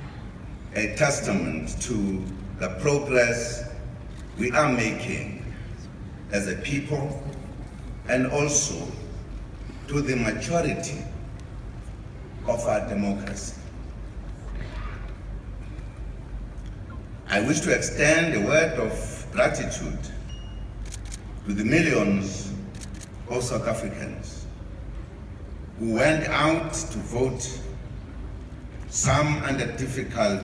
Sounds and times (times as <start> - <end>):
Male speech, man speaking: 0.8 - 3.8, 4.4 - 5.5, 6.3 - 7.4, 8.1 - 9.1, 9.9 - 11.1, 12.4 - 13.6, 17.3 - 20.2, 21.4 - 22.6, 23.3 - 24.5, 25.8 - 27.8, 28.9 - 30.4.